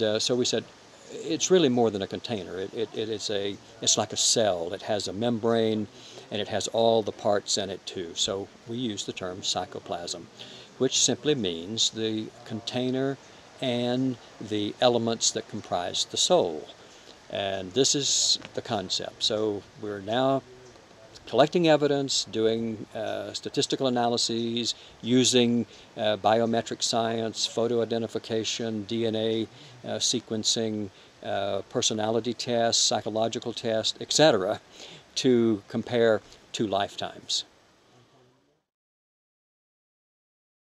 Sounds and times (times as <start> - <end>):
Speech: 0.0 - 38.5.